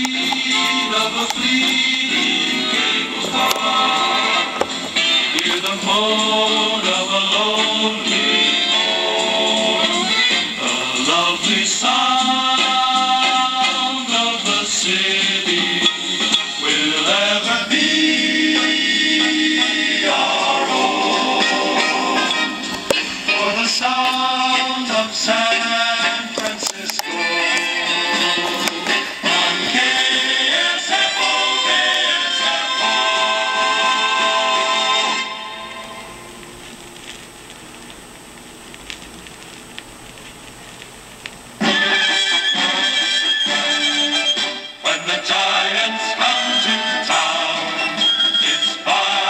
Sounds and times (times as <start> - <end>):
Music: 0.0 - 36.7, 41.6 - 49.2.